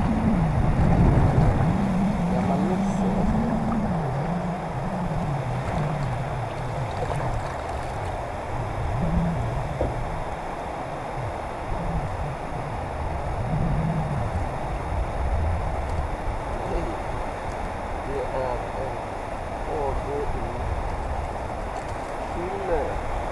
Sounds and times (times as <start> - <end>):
Wind: 0.0 - 23.3.